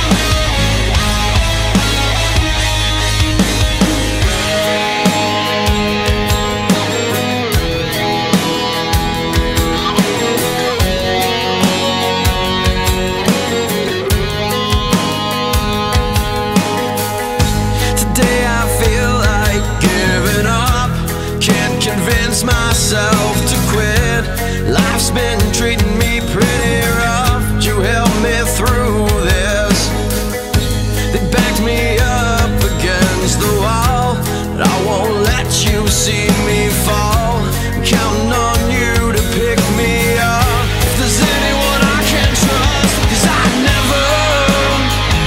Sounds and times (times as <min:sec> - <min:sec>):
Music: 0:00.0 - 0:45.2.